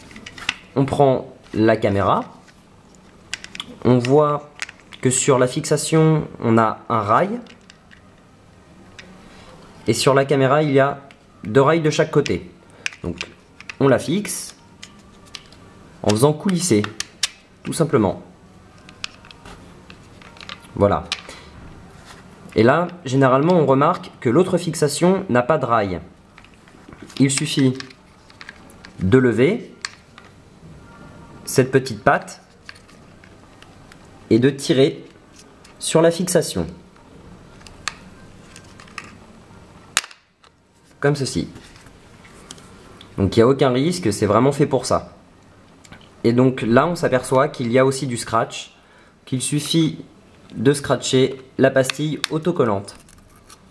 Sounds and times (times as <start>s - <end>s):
Speech: 0.8s - 2.4s, 3.8s - 7.5s, 9.9s - 14.6s, 16.0s - 17.0s, 17.6s - 18.3s, 20.8s - 21.2s, 22.6s - 26.1s, 27.2s - 27.9s, 29.0s - 29.8s, 31.5s - 32.5s, 34.3s - 35.1s, 35.8s - 36.8s, 41.0s - 41.6s, 43.2s - 45.2s, 46.2s - 53.0s.